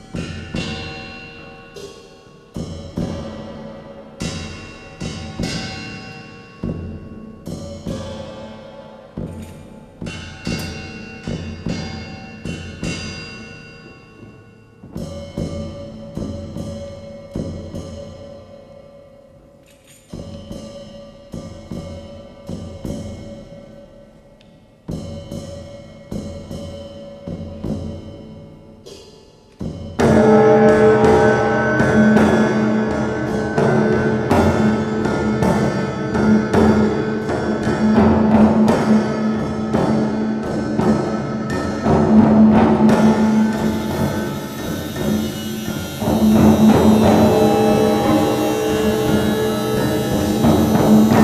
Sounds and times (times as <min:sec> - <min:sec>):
Music: 0:00.0 - 0:51.2.